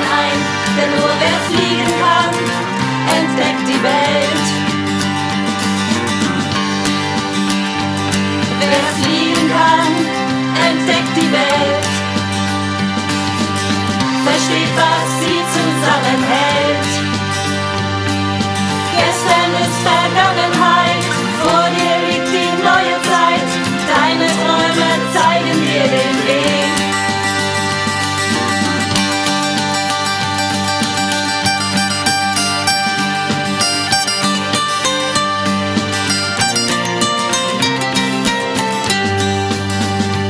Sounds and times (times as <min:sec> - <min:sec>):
Singing: 0:00.0 - 0:04.6, 0:08.6 - 0:12.0, 0:14.2 - 0:17.1, 0:18.9 - 0:27.1
Guitar: 0:00.0 - 0:40.3.